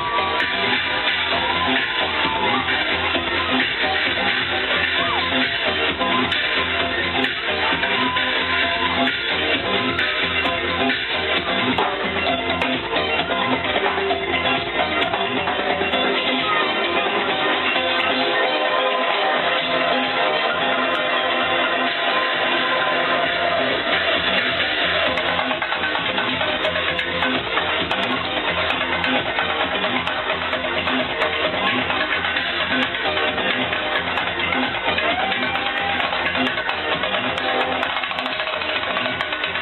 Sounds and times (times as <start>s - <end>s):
House music: 0.0s - 39.6s.